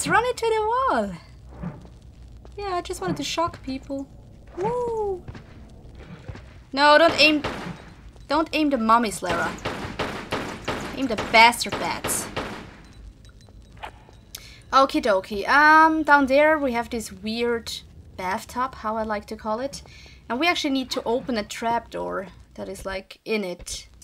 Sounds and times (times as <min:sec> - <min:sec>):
Speech: 0:00.0 - 0:01.2, 0:02.6 - 0:05.2, 0:06.8 - 0:07.4, 0:08.3 - 0:09.6, 0:11.0 - 0:12.3, 0:14.7 - 0:23.9.